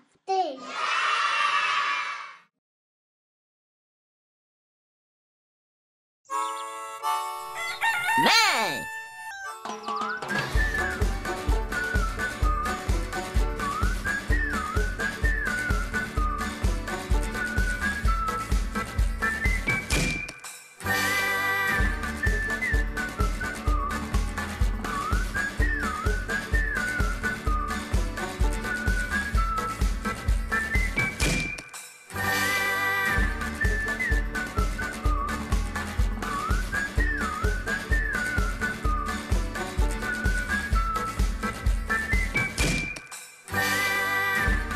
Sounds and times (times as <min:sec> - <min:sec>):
Music: 0:06.3 - 0:08.2, 0:08.8 - 0:44.7.